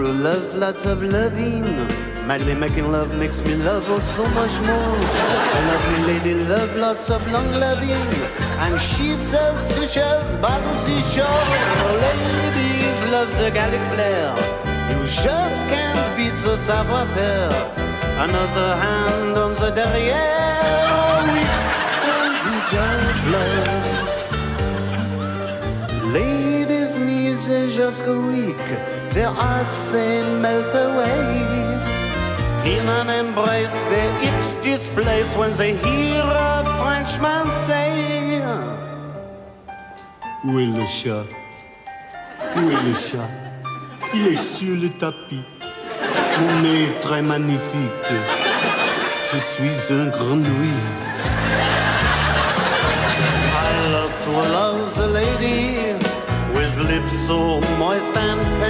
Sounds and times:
Laughter: 3.8s - 10.2s, 11.1s - 14.1s, 20.6s - 26.2s, 42.3s - 44.9s, 45.8s - 47.0s, 48.0s - 49.4s, 50.7s - 54.0s.

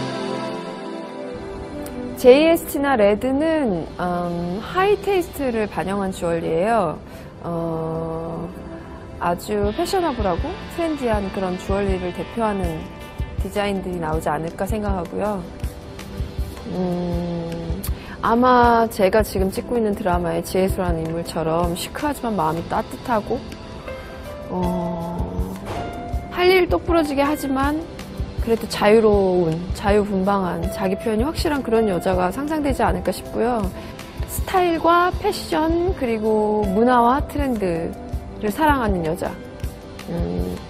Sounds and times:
Music: 0.0s - 40.7s
Speech: 2.2s - 8.6s, 9.2s - 15.5s, 16.7s - 23.4s, 24.5s - 25.6s, 26.4s - 33.7s, 34.3s - 39.4s, 40.1s - 40.6s.

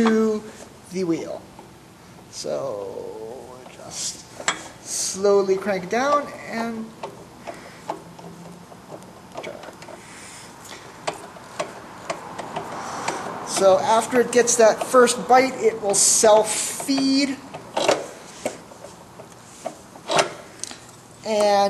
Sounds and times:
Speech: 0.0s - 1.5s, 2.3s - 4.2s, 4.9s - 6.9s, 13.5s - 17.4s, 21.2s - 21.7s
Tools: 16.8s - 18.6s, 19.2s - 20.4s.

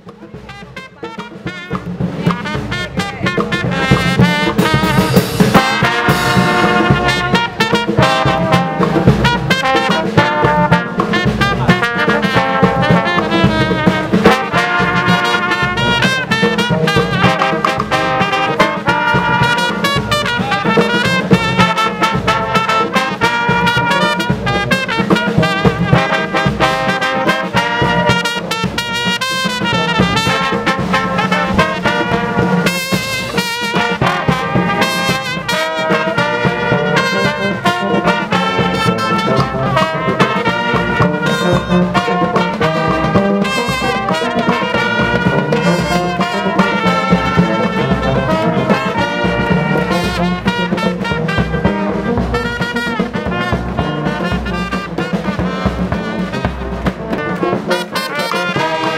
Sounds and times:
Brass instrument: 0.0s - 58.9s.

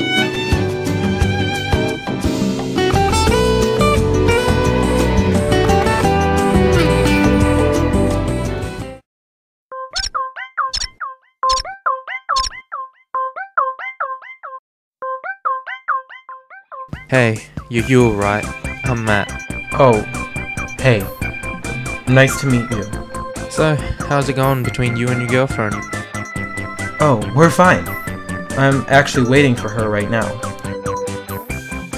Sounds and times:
Music: 0.0s - 9.0s, 15.0s - 31.9s
Speech: 17.0s - 20.1s, 20.8s - 21.1s, 22.1s - 22.9s, 23.6s - 25.8s, 27.0s - 27.9s, 28.6s - 30.4s.

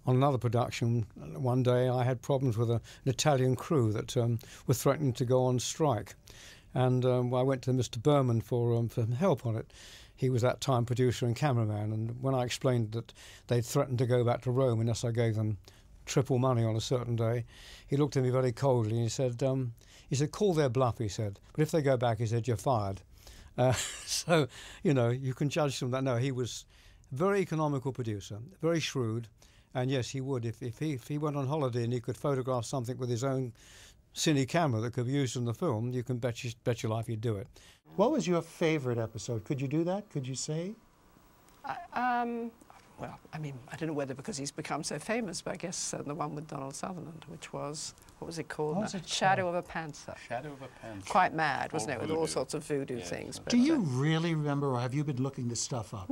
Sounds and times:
Inside, small room: 0.0s - 56.1s
Speech: 41.7s - 56.1s.

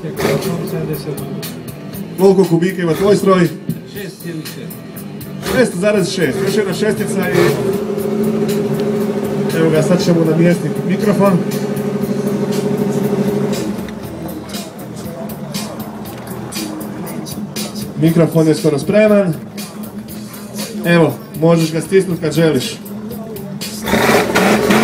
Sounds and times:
Speech: 0.0s - 1.4s, 2.2s - 4.8s, 5.4s - 7.6s, 9.5s - 11.4s, 18.0s - 19.4s, 20.6s - 23.7s
Music: 0.0s - 24.8s.

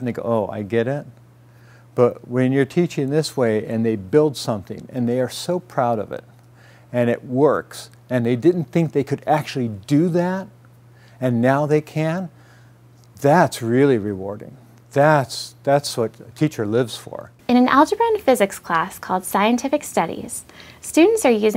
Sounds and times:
Speech: 2.0s - 6.2s, 7.0s - 10.5s, 11.2s - 12.3s, 13.2s - 21.5s.

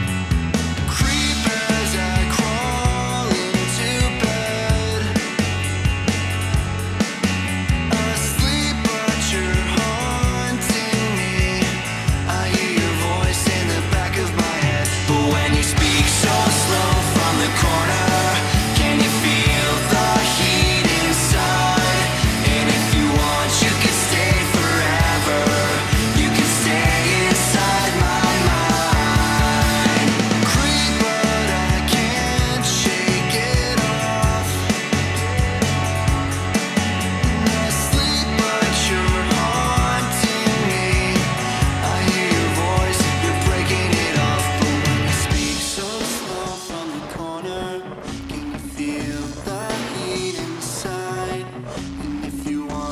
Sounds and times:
Exciting music: 0.0s - 50.9s.

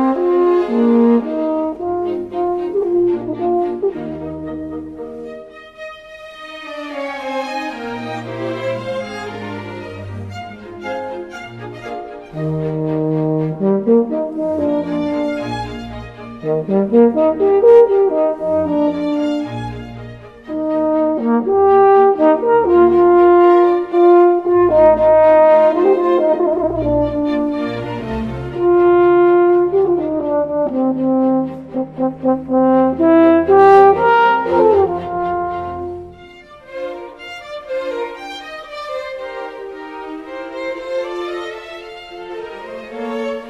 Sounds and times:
Brass instrument: 0.0s - 43.4s.

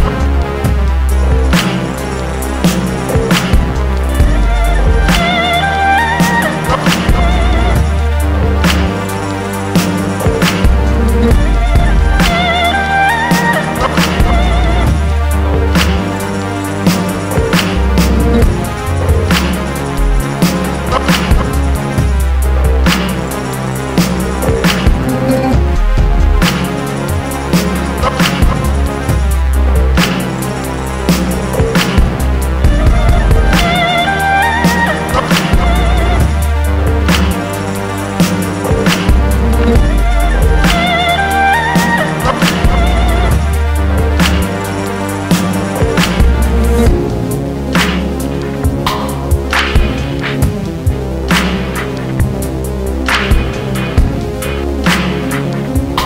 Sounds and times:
Electronica: 0.0s - 56.0s.

